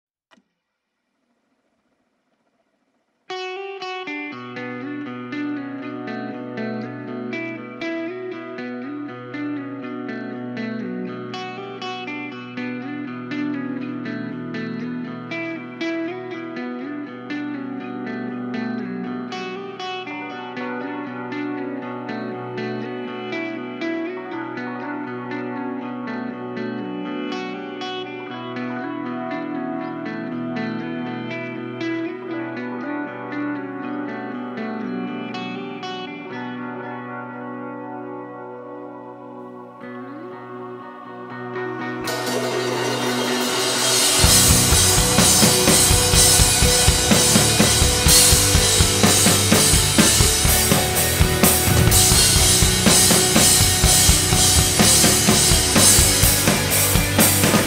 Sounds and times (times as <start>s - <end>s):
Music: 3.3s - 57.6s.